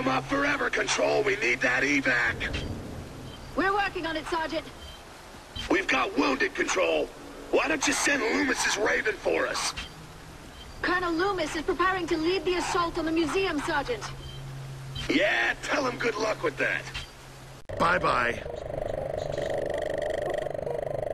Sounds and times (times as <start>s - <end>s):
Outside, urban or manmade: 0.0s - 21.1s.